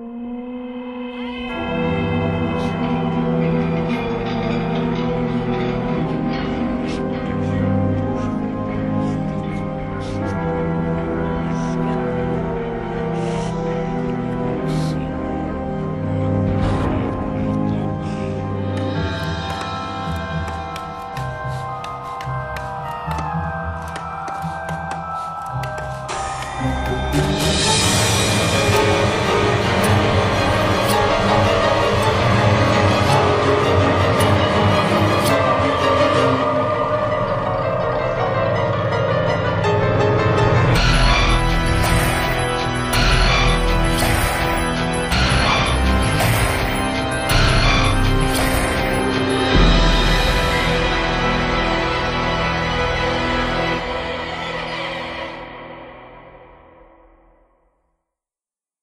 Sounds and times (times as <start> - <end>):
Soundtrack music: 0.0 - 57.4.